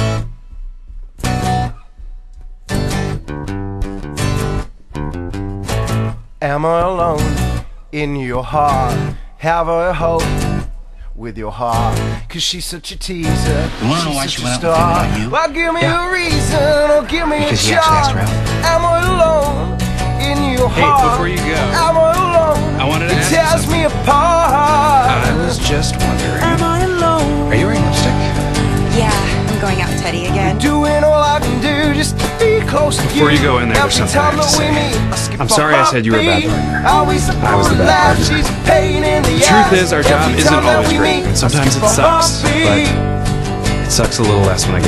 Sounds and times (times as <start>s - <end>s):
Music: 0.0s - 44.8s
Speech: 6.4s - 7.3s, 8.0s - 10.2s, 11.2s - 16.5s, 17.3s - 18.3s, 20.3s - 22.0s, 22.8s - 23.8s, 25.0s - 28.3s, 28.9s - 30.7s, 32.8s - 38.5s, 39.1s - 43.0s, 43.9s - 44.8s.